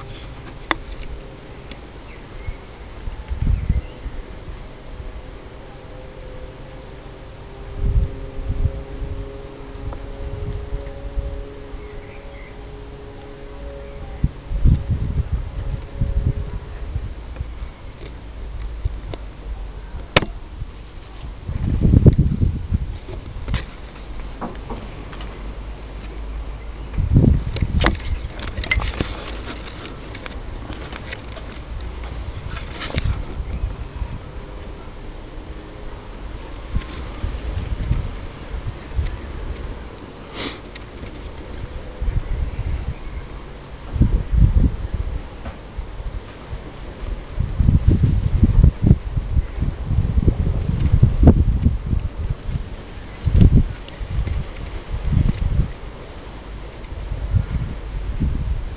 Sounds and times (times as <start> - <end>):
Sniff: 40.3 - 40.7.